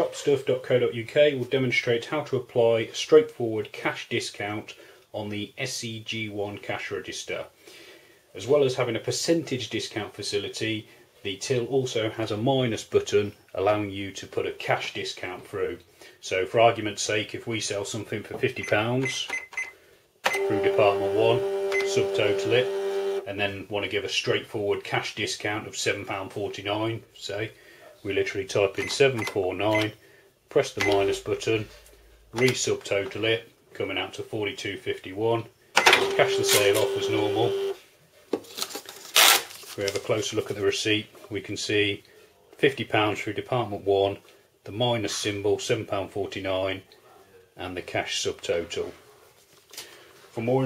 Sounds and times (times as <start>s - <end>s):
Speech: 0.0s - 7.6s, 8.3s - 19.4s, 20.4s - 37.8s, 39.8s - 49.3s, 50.3s - 50.6s
Cash register: 20.3s - 23.3s, 30.8s - 31.2s, 35.8s - 37.8s.